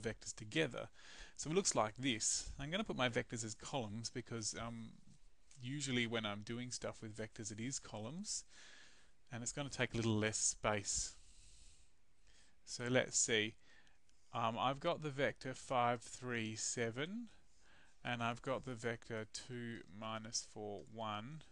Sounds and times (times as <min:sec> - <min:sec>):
Speech: 0:00.0 - 0:05.0, 0:05.6 - 0:08.5, 0:09.3 - 0:11.2, 0:12.7 - 0:13.6, 0:14.4 - 0:17.4, 0:18.0 - 0:21.5.